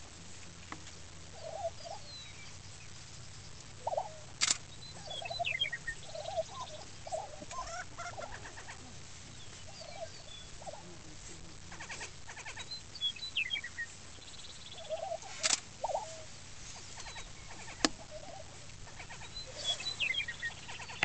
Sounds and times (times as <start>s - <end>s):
Cluck: 3.8s - 4.3s, 5.0s - 9.0s, 9.6s - 12.8s, 14.8s - 21.0s.